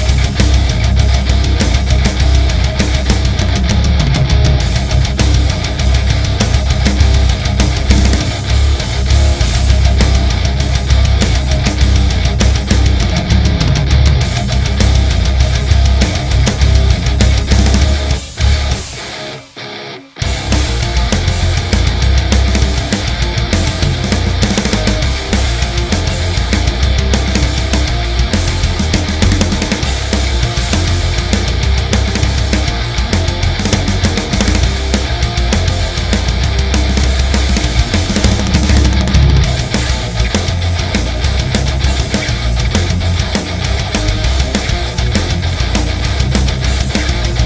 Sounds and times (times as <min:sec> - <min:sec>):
Bass guitar: 0:00.0 - 0:47.4
Electric guitar: 0:00.0 - 0:47.4
Funk: 0:00.0 - 0:47.4.